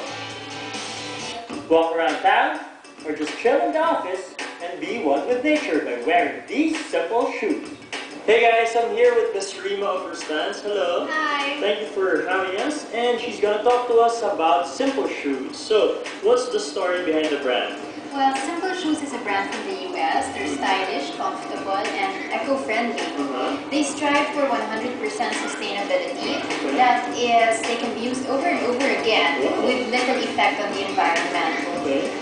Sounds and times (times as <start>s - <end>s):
Music: 0.0s - 32.2s.